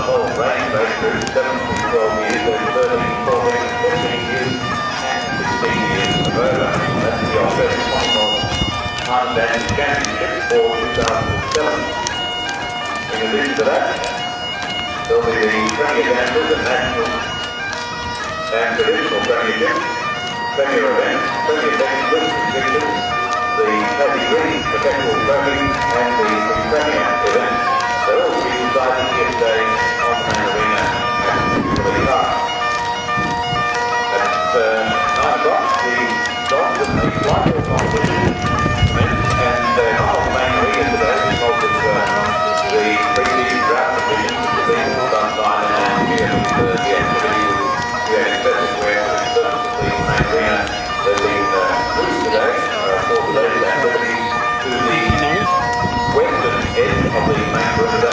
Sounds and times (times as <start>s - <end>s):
Speech: 0.0s - 11.9s, 13.1s - 14.1s, 15.0s - 17.3s, 18.5s - 19.8s, 20.6s - 23.0s, 23.6s - 32.5s, 34.1s - 38.4s, 39.0s - 55.5s, 56.1s - 58.1s
Bagpipes: 0.0s - 58.1s
Outside, urban or manmade: 0.0s - 58.1s.